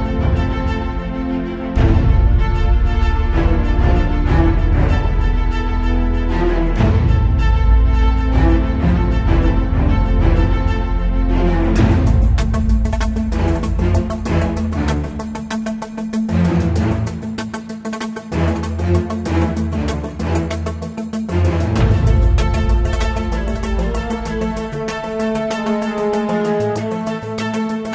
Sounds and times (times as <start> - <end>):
Music: 0.0 - 27.9.